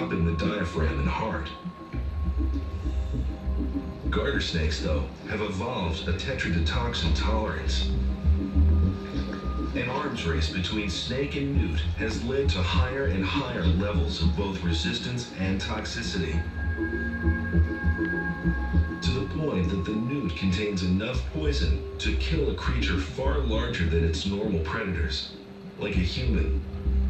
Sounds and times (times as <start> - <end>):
Speech: 0.0 - 1.6, 4.1 - 8.0, 9.7 - 16.5, 19.0 - 26.7
Music: 0.0 - 27.1.